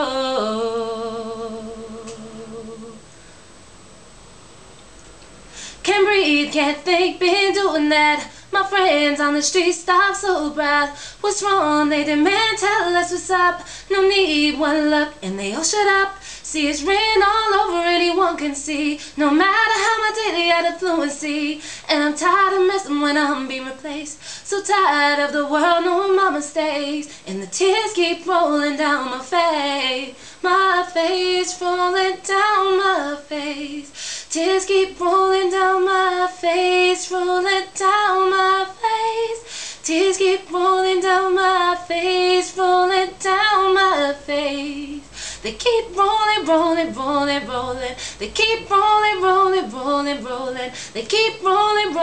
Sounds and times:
Female singing: 0.0s - 3.0s, 5.8s - 52.0s.

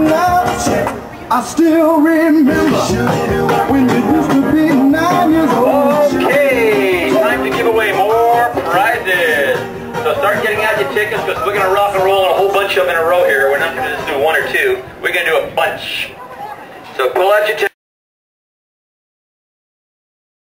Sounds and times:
Music: 0.0s - 14.8s
Speech: 6.3s - 17.8s.

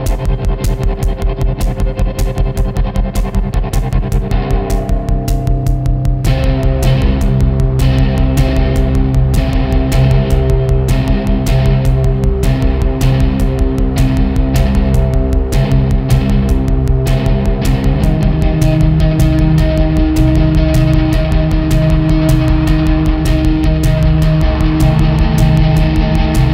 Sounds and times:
Exciting music: 3.0s - 26.5s.

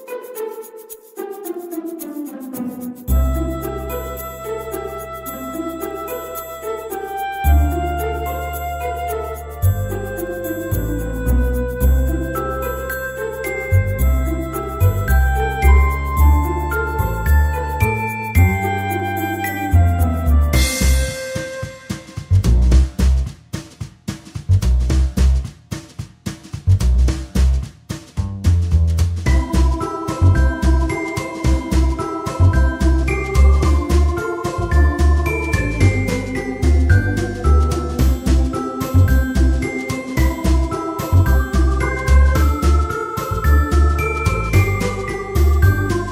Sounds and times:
Music: 0.0s - 46.1s.

